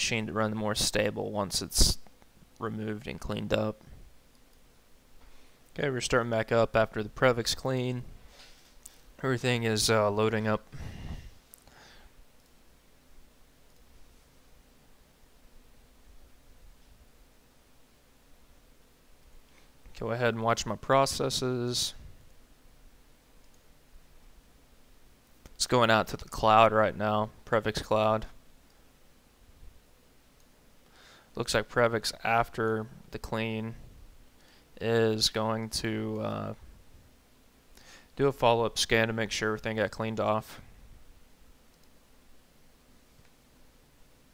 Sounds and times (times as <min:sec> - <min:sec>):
Speech: 0:00.0 - 0:03.9, 0:05.8 - 0:08.1, 0:09.2 - 0:10.7, 0:20.0 - 0:22.1, 0:25.6 - 0:28.4, 0:31.4 - 0:33.8, 0:34.8 - 0:36.6, 0:38.2 - 0:40.7.